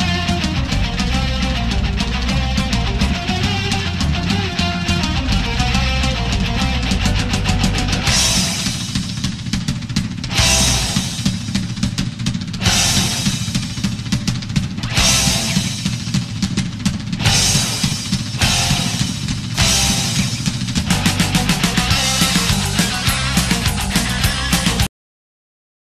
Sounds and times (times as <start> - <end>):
Music: 0.0 - 24.9.